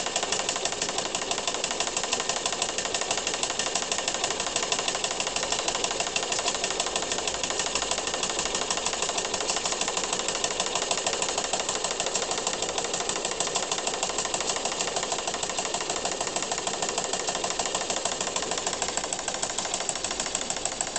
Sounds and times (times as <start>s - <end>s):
Idling: 0.0s - 20.9s.